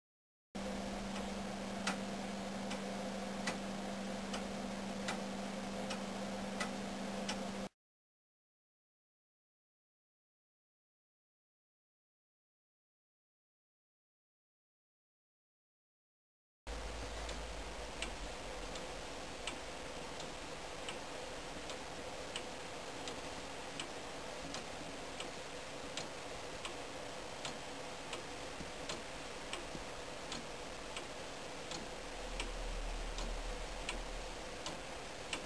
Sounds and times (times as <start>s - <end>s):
Tick-tock: 0.6s - 7.7s, 17.1s - 35.4s.